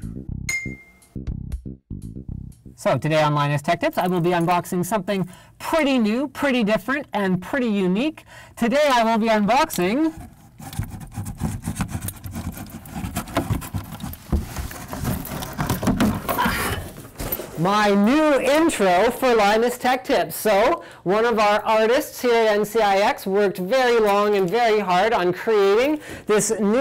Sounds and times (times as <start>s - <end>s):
Speech: 2.8s - 10.2s, 17.6s - 26.8s.